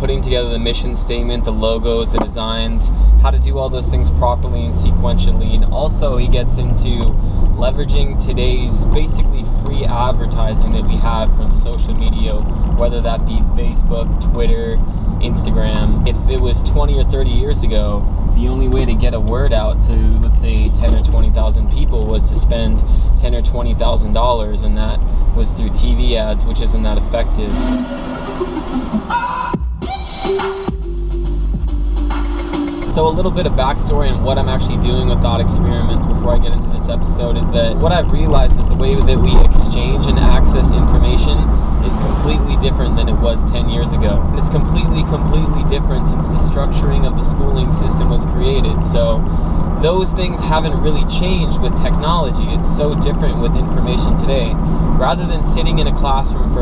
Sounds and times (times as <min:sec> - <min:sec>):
Speech: 0:00.0 - 0:27.8, 0:32.9 - 0:56.6.